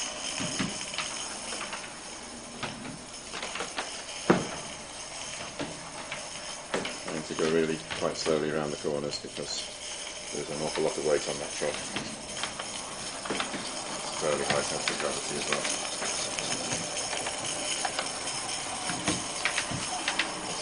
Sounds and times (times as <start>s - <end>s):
Speech: 7.1s - 9.7s, 10.3s - 12.1s, 14.2s - 15.8s.